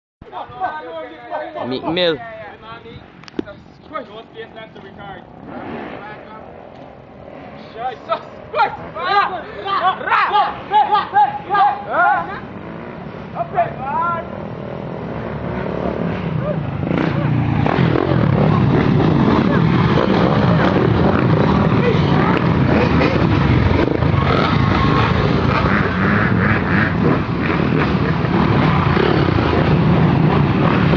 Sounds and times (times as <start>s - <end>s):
Speech: 0.3s - 5.2s
Motorcycle: 3.1s - 30.9s.